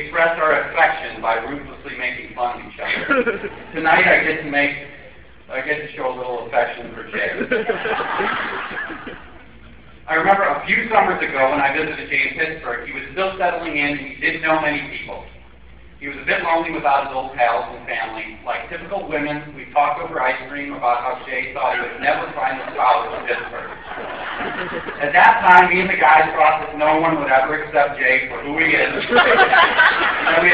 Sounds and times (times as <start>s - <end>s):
Male speech, man speaking: 0.0s - 3.0s, 3.8s - 7.4s, 10.1s - 15.3s, 16.0s - 23.8s, 25.0s - 29.5s, 30.2s - 30.5s.